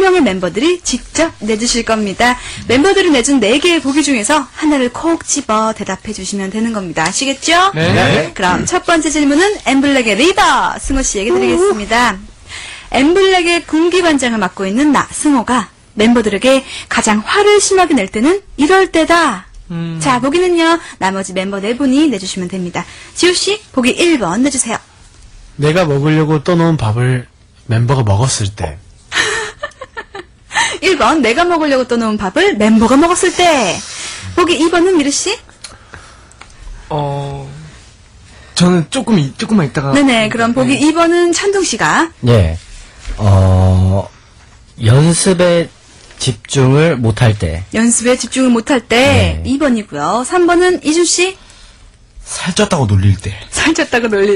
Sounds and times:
Speech: 7.4 - 12.2, 43.2 - 44.1, 48.9 - 50.1.

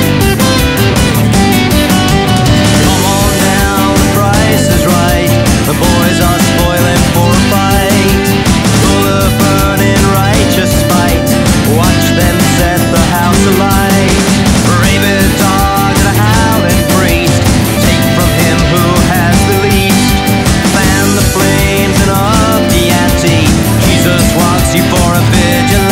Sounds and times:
Music: 0.0 - 25.9.

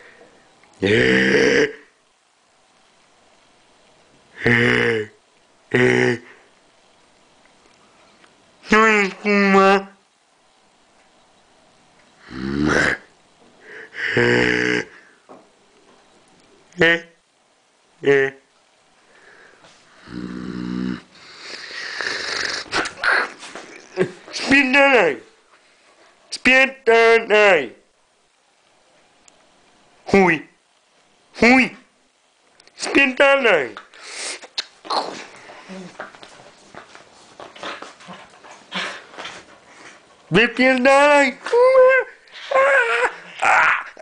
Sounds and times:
Speech: 8.6 - 10.0, 16.8 - 17.2, 18.0 - 18.5, 24.0 - 25.3, 26.3 - 27.8, 30.1 - 30.6, 31.4 - 31.9, 32.8 - 33.8, 40.3 - 42.2.

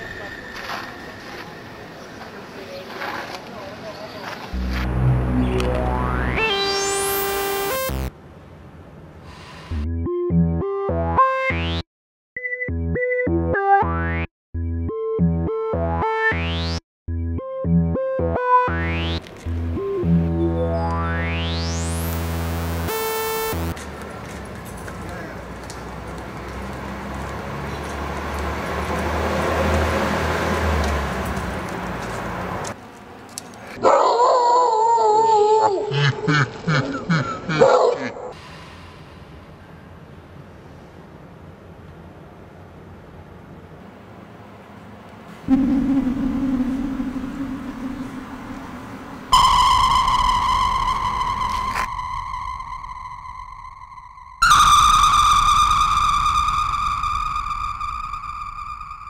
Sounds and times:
Outside, urban or manmade: 0.0 - 59.0
Bark: 33.8 - 34.5, 37.6 - 38.2
Bow-wow: 33.8 - 34.5, 37.6 - 38.4.

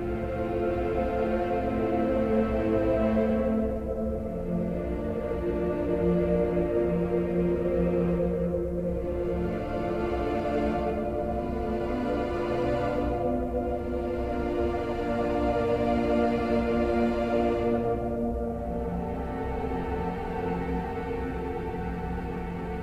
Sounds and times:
Music: 0.0 - 22.8.

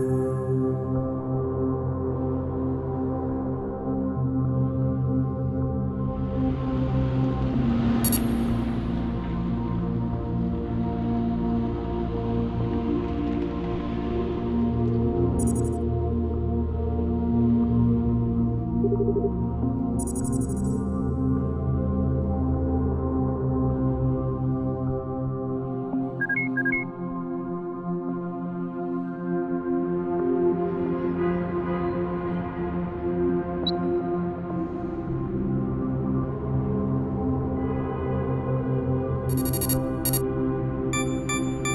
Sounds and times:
Music: 0.0 - 41.7.

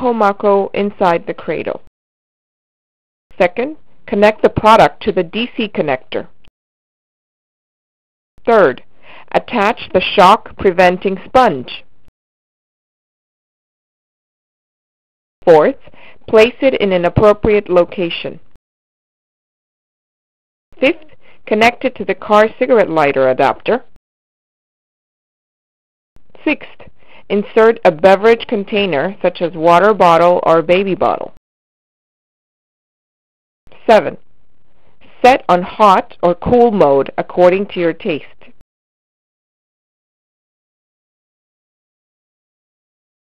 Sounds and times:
Speech: 0.0 - 1.9, 3.4 - 6.3, 8.4 - 11.9, 15.4 - 18.4, 20.8 - 23.9, 26.4 - 31.4, 33.8 - 34.2, 35.2 - 38.5.

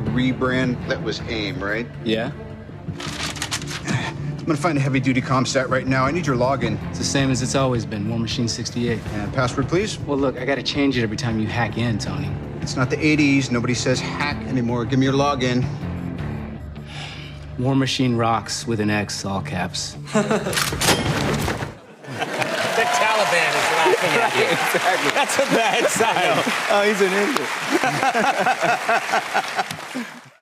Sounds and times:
Music: 0.0 - 30.4.

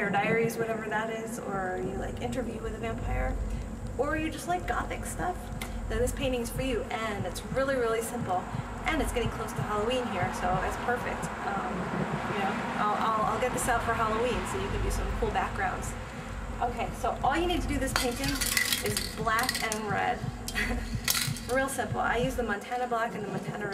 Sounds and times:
Speech: 0.0 - 3.4, 4.0 - 16.0, 16.6 - 20.3, 21.5 - 23.7.

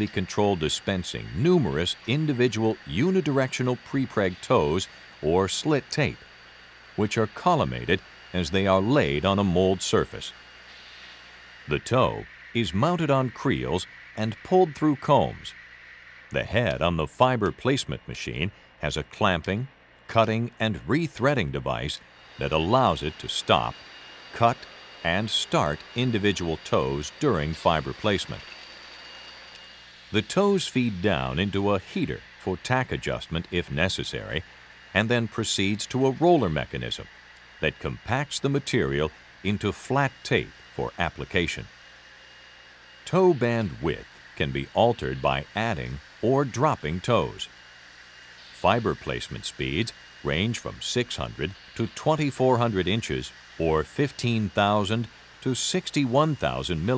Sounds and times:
Speech: 0.0 - 6.2, 7.0 - 10.4, 11.7 - 15.6, 16.3 - 23.8, 24.4 - 28.5, 30.2 - 41.7, 43.1 - 47.5, 48.6 - 56.9.

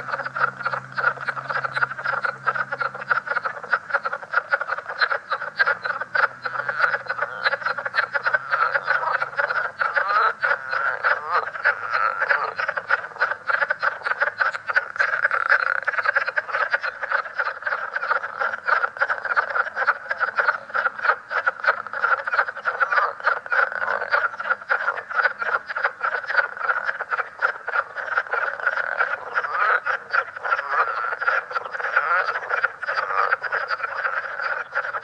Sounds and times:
Croak: 0.0 - 35.0.

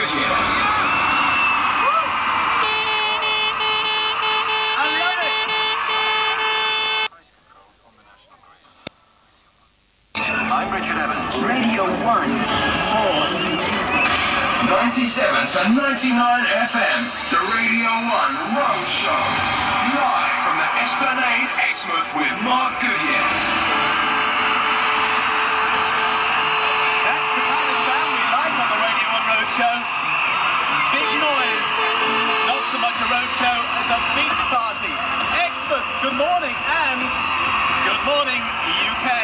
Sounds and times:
Speech: 7.1 - 8.8, 9.4 - 13.6, 14.6 - 23.2, 27.0 - 29.8, 32.5 - 37.1, 37.8 - 39.2.

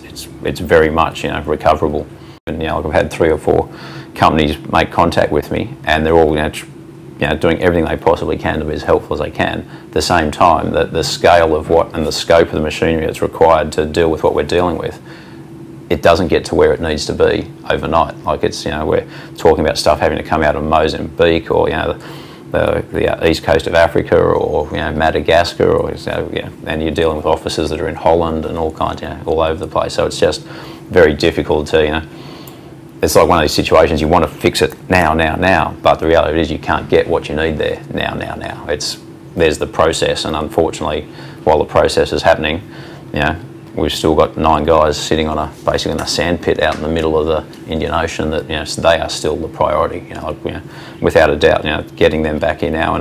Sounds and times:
Speech: 0.0 - 15.1, 15.9 - 32.1, 33.0 - 53.0.

